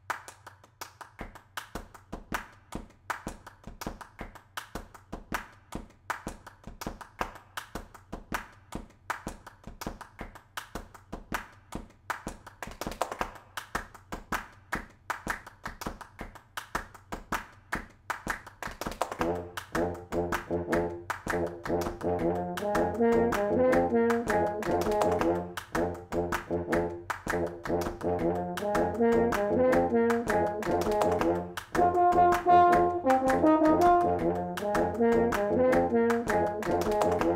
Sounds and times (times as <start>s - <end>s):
Brass instrument: 19.0s - 37.3s.